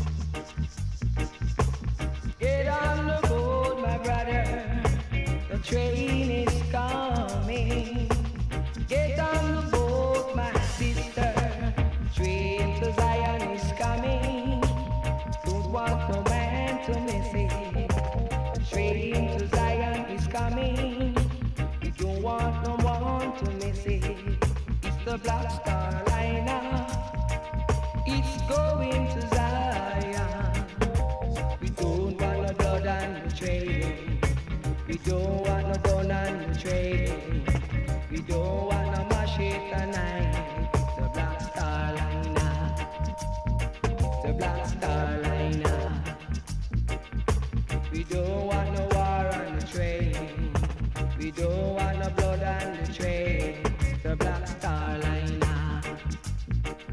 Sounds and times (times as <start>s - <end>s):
Music: 0.0s - 56.9s.